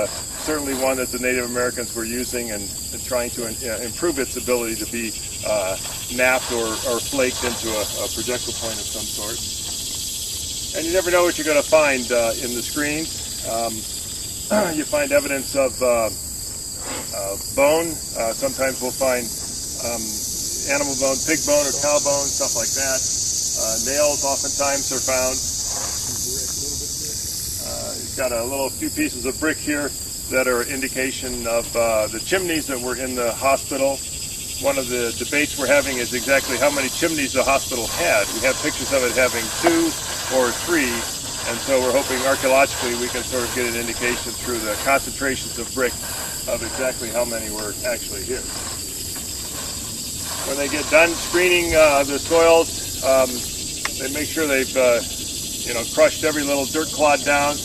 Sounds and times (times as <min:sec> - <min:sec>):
Speech: 0:00.0 - 0:09.4, 0:10.8 - 0:13.8, 0:14.5 - 0:16.2, 0:17.1 - 0:23.0, 0:23.6 - 0:25.4, 0:26.2 - 0:34.0, 0:34.6 - 0:48.5, 0:50.4 - 0:53.4, 0:54.0 - 0:55.0, 0:55.7 - 0:57.6.